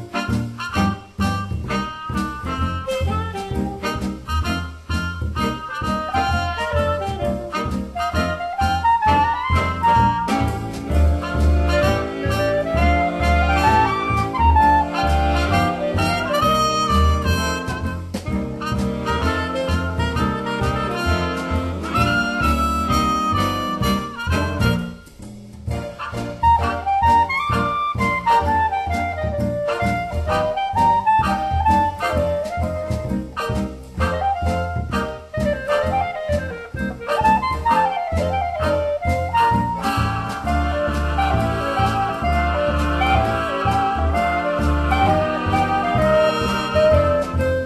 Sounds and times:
Music: 0.0s - 47.6s.

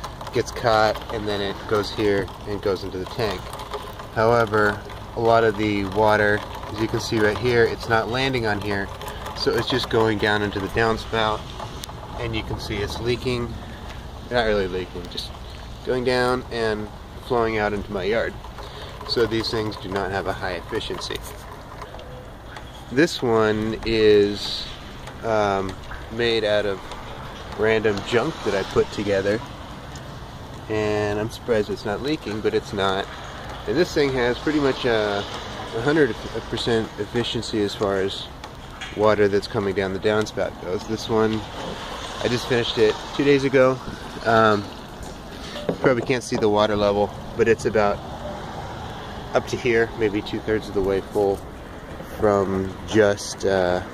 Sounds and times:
Speech: 0.3s - 3.5s, 4.2s - 11.4s, 12.2s - 13.6s, 14.3s - 18.4s, 19.1s - 21.3s, 22.9s - 26.8s, 27.5s - 29.5s, 30.7s - 38.3s, 39.0s - 41.5s, 42.2s - 44.7s, 45.7s - 48.0s, 49.3s - 51.4s, 52.1s - 53.9s.

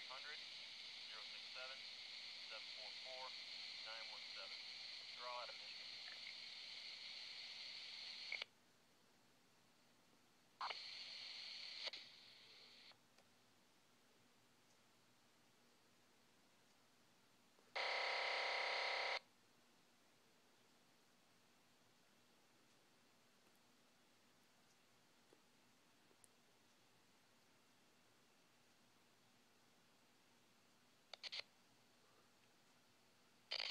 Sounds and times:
Radio: 0.0s - 8.5s, 10.6s - 13.0s, 17.8s - 19.2s, 31.2s - 31.5s.

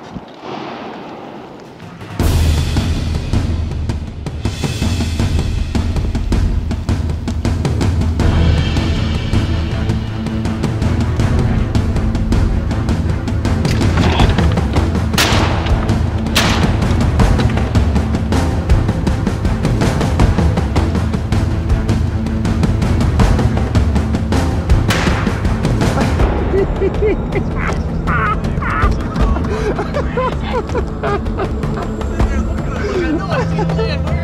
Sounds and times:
Music: 0.2s - 34.2s.

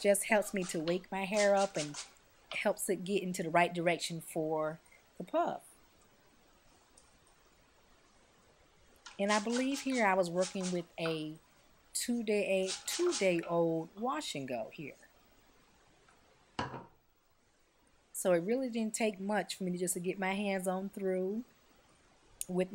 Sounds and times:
Speech: 0.0s - 2.0s, 2.6s - 5.6s, 9.2s - 11.4s, 12.0s - 15.0s, 18.2s - 21.5s, 22.4s - 22.7s.

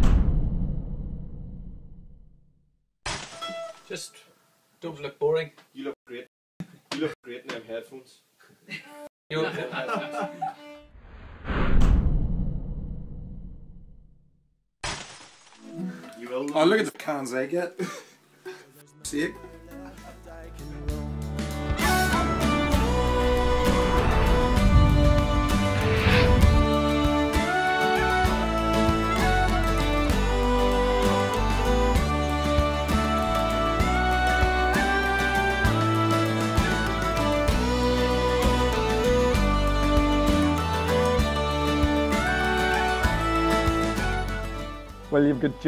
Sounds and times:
Speech: 3.9s - 6.3s, 6.9s - 8.2s, 16.2s - 17.8s, 19.0s - 20.9s, 45.1s - 45.6s
Music: 8.9s - 10.8s, 15.6s - 17.6s, 18.2s - 45.6s.

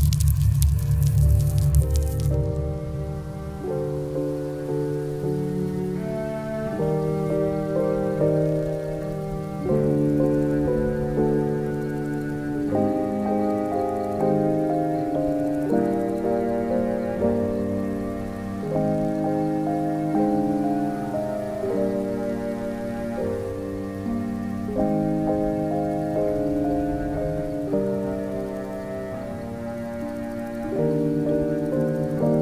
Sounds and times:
Music: 0.0s - 32.4s
Outside, rural or natural: 0.0s - 32.4s.

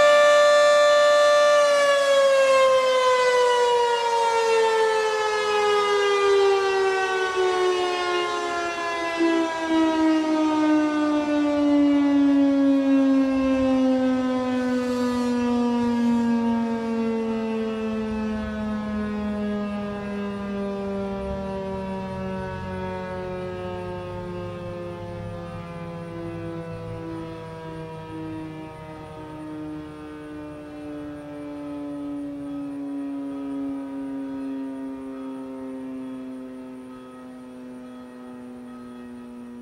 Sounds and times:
Civil defense siren: 0.0s - 39.6s.

